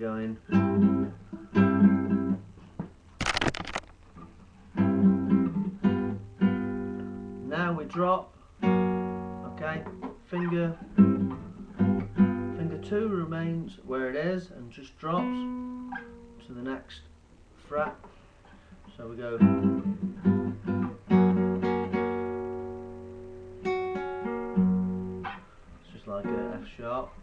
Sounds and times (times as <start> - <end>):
Speech: 0.0 - 0.6, 7.4 - 8.4, 9.4 - 10.8, 12.6 - 15.5, 16.4 - 18.0, 18.9 - 19.5, 25.8 - 27.2
Guitar: 0.0 - 27.2.